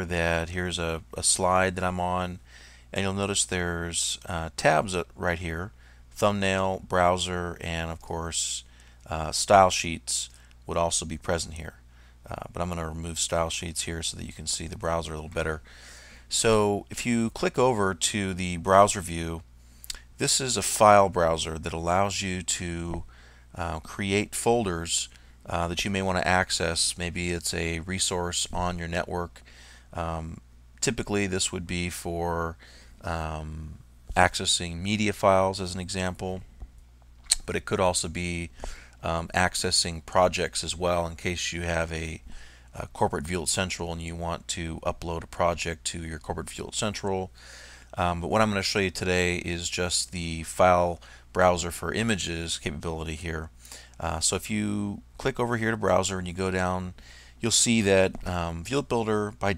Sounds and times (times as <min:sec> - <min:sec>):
Speech: 0:00.0 - 0:15.6, 0:16.3 - 0:36.5, 0:37.3 - 0:47.3, 0:48.0 - 0:59.5.